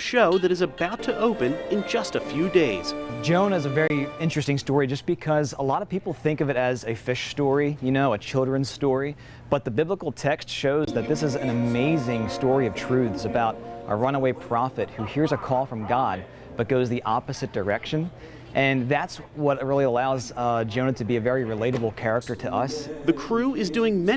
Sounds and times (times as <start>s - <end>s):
Speech: 0.0s - 24.1s
Music: 0.3s - 4.5s, 10.9s - 16.8s.